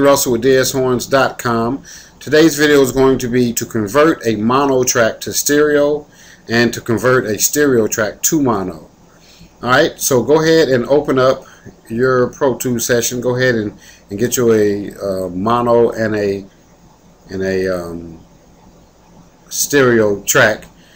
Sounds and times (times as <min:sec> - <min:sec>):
Speech: 0:00.0 - 0:09.0, 0:09.6 - 0:16.5, 0:17.3 - 0:18.3, 0:19.5 - 0:20.7.